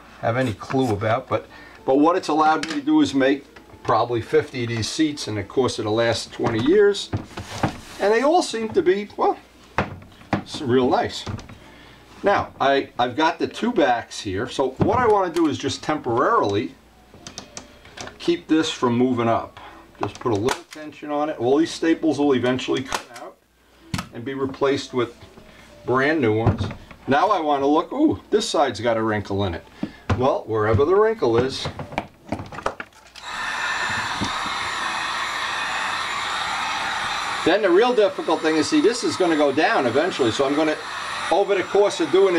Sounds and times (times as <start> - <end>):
Speech: 0.2 - 7.2, 8.0 - 9.4, 10.5 - 11.4, 12.2 - 16.8, 18.2 - 23.4, 24.1 - 25.2, 25.9 - 31.8, 37.4 - 42.3.